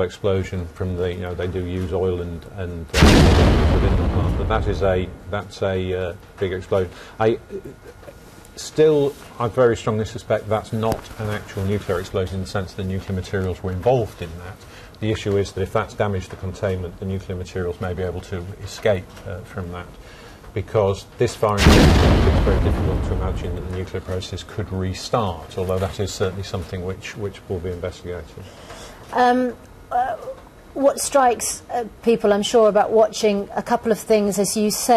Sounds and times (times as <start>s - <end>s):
Speech: 0.0s - 3.0s, 3.8s - 8.0s, 8.6s - 20.0s, 20.6s - 28.5s, 29.1s - 34.9s.